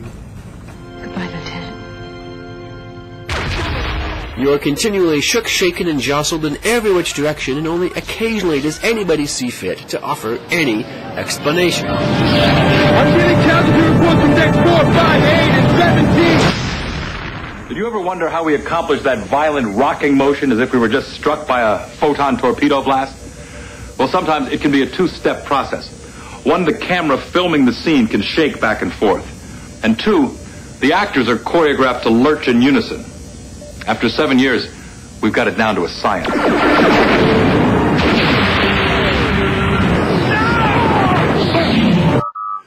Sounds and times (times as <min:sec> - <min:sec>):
Speech: 0:04.4 - 0:11.9, 0:17.7 - 0:23.2, 0:24.0 - 0:33.1, 0:33.8 - 0:36.2.